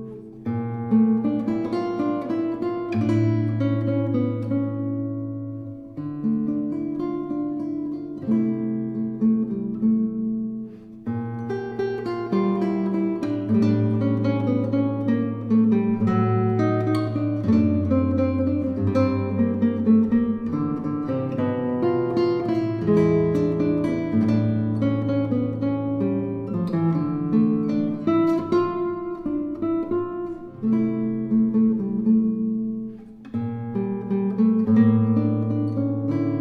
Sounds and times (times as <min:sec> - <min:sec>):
Acoustic guitar: 0:00.0 - 0:36.4
Strum: 0:00.0 - 0:36.4.